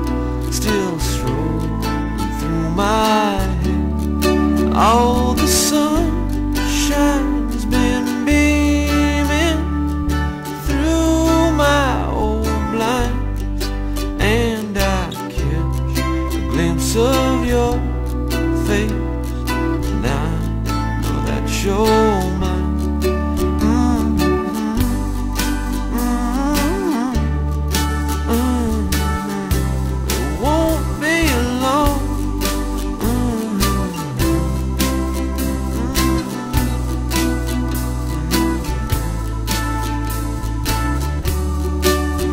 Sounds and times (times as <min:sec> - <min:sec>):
Tender music: 0:00.0 - 0:42.3.